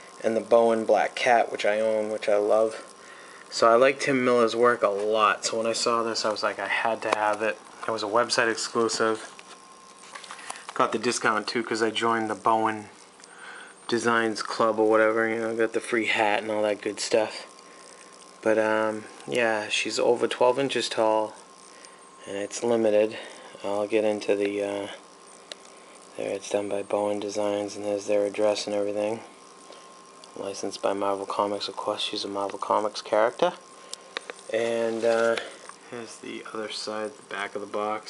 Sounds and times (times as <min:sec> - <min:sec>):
Speech: 0:00.2 - 0:02.9, 0:03.5 - 0:09.3, 0:10.8 - 0:13.0, 0:13.9 - 0:17.5, 0:18.4 - 0:21.4, 0:22.2 - 0:25.0, 0:26.2 - 0:29.3, 0:30.4 - 0:33.6, 0:34.5 - 0:38.0.